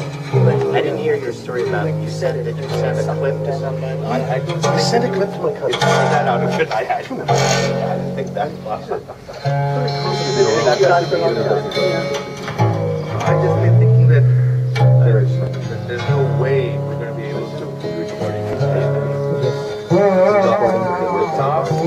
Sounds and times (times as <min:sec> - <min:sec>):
Bowed string instrument: 0:00.0 - 0:21.8
Speech: 0:00.3 - 0:12.3, 0:13.2 - 0:21.8.